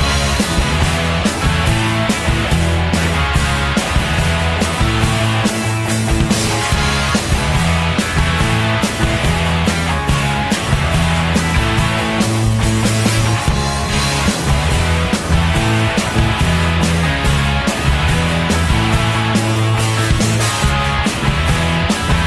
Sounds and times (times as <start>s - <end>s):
Music: 0.0s - 22.2s.